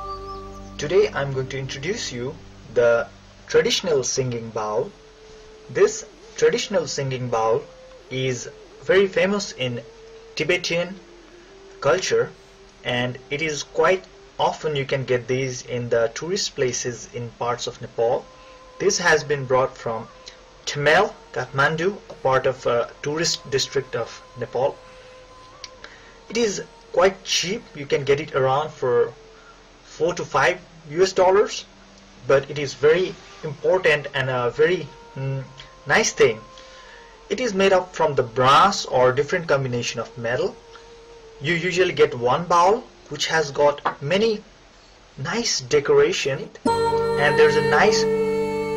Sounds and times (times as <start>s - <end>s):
Speech: 0.8s - 4.9s, 5.7s - 11.0s, 11.8s - 18.2s, 18.8s - 20.1s, 20.7s - 24.8s, 26.3s - 29.2s, 29.9s - 36.5s, 37.3s - 40.6s, 41.4s - 44.5s, 45.2s - 48.7s.